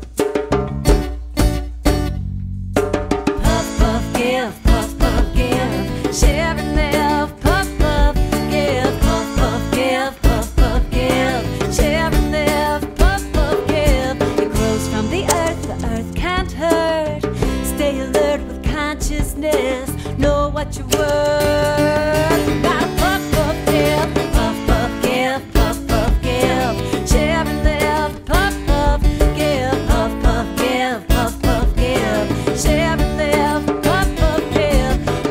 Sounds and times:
Music: 0:00.0 - 0:35.3.

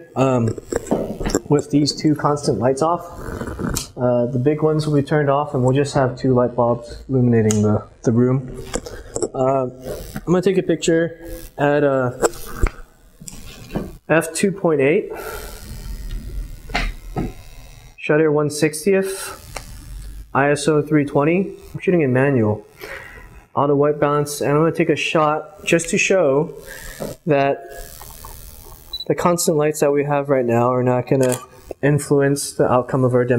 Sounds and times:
Speech: 0:00.0 - 0:00.6, 0:01.4 - 0:03.1, 0:04.0 - 0:08.5, 0:09.3 - 0:12.2, 0:14.1 - 0:15.1, 0:18.0 - 0:19.4, 0:20.4 - 0:22.6, 0:23.6 - 0:26.6, 0:27.3 - 0:27.7, 0:29.0 - 0:33.3.

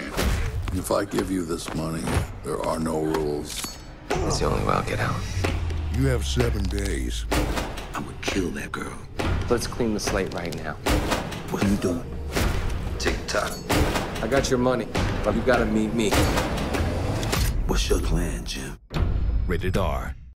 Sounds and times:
Music: 0:00.0 - 0:20.3
Speech: 0:19.5 - 0:20.2.

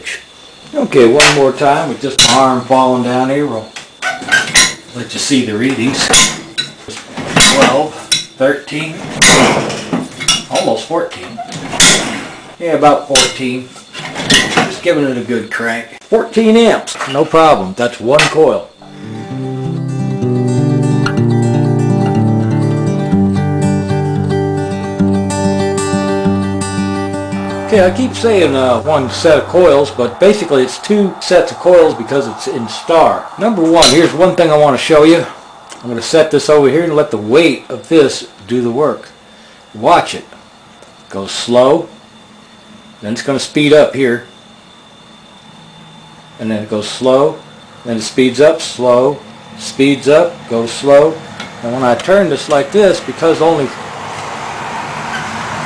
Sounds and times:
Speech: 0:00.0 - 0:03.7, 0:04.9 - 0:06.2, 0:06.9 - 0:09.0, 0:10.5 - 0:11.5, 0:12.6 - 0:13.8, 0:14.6 - 0:18.8, 0:27.7 - 0:39.2, 0:39.8 - 0:40.4, 0:41.1 - 0:42.0, 0:43.0 - 0:44.3, 0:46.4 - 0:53.8.

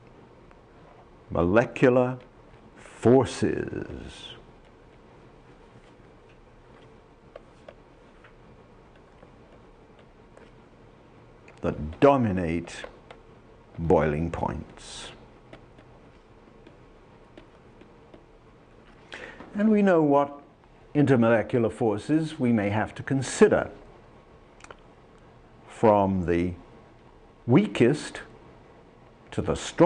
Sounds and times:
Speech: 0:01.3 - 0:04.5, 0:11.6 - 0:13.0, 0:13.8 - 0:15.2, 0:19.5 - 0:23.8, 0:25.7 - 0:26.6, 0:27.5 - 0:28.4, 0:29.3 - 0:29.8.

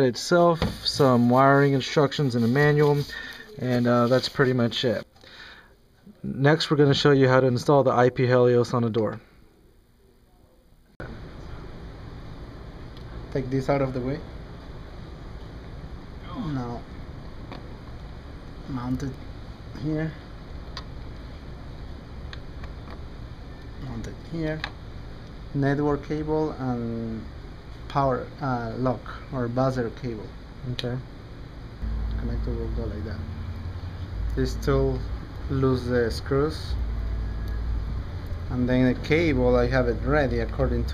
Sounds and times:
Speech: 0:00.0 - 0:05.1, 0:06.1 - 0:09.3, 0:13.3 - 0:14.2, 0:16.2 - 0:16.9, 0:18.7 - 0:19.2, 0:19.8 - 0:20.3, 0:23.8 - 0:24.7, 0:25.5 - 0:27.3, 0:27.9 - 0:31.1, 0:32.2 - 0:33.2, 0:34.3 - 0:36.8, 0:38.5 - 0:40.9.

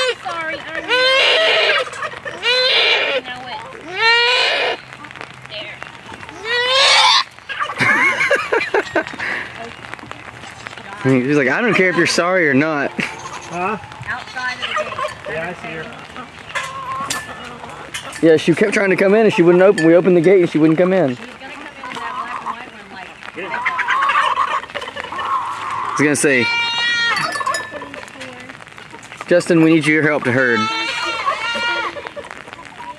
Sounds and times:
Livestock, farm animals, working animals: 0:00.0 - 0:07.8, 0:10.5 - 0:32.9.

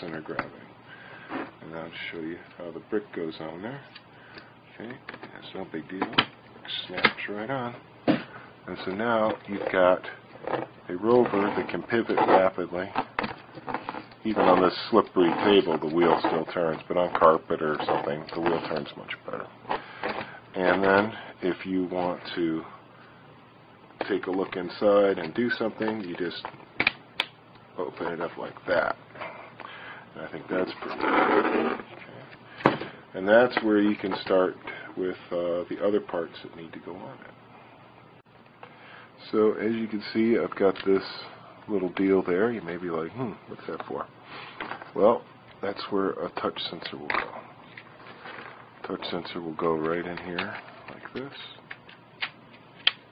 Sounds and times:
Speech: 0:00.0 - 0:00.7, 0:01.6 - 0:03.9, 0:04.7 - 0:07.8, 0:08.6 - 0:10.2, 0:10.9 - 0:13.0, 0:14.2 - 0:19.5, 0:20.5 - 0:22.8, 0:24.0 - 0:26.5, 0:27.8 - 0:29.0, 0:30.2 - 0:32.3, 0:33.1 - 0:37.3, 0:39.2 - 0:44.1, 0:44.9 - 0:47.4, 0:48.8 - 0:51.6.

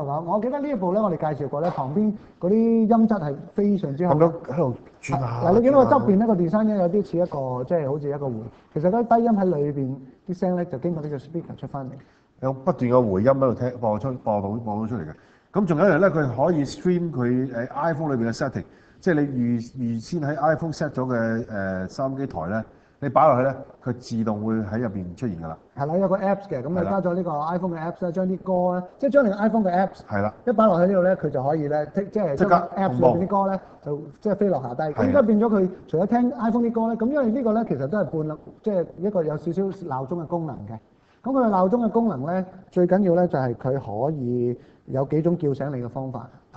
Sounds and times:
Speech: 0:00.0 - 0:46.5.

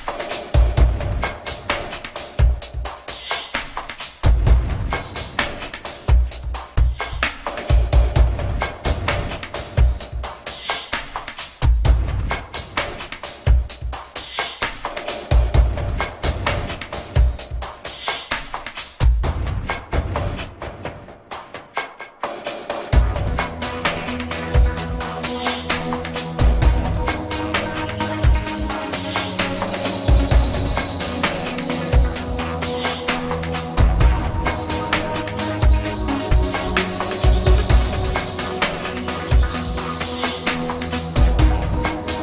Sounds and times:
Background music: 0:00.0 - 0:42.2.

